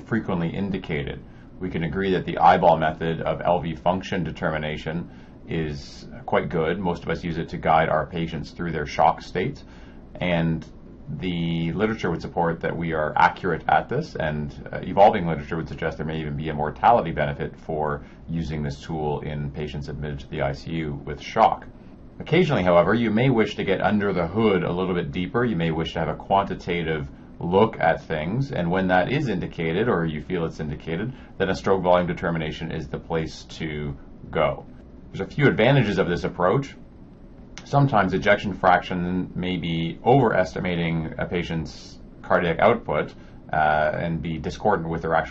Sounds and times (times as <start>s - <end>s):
Speech: 0.0s - 36.9s, 37.6s - 45.3s.